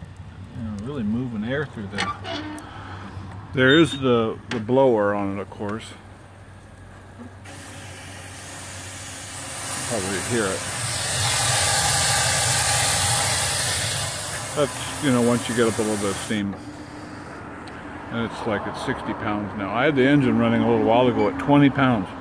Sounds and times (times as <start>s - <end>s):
Speech: 0.5s - 2.2s, 3.6s - 6.0s, 9.8s - 10.7s, 14.6s - 16.6s, 18.1s - 22.2s
Hiss: 7.4s - 17.3s.